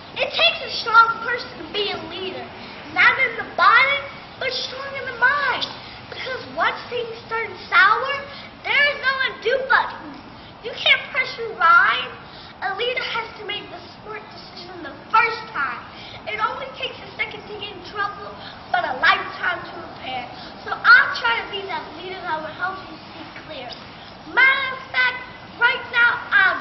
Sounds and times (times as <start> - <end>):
Female speech, woman speaking: 0.2 - 26.6.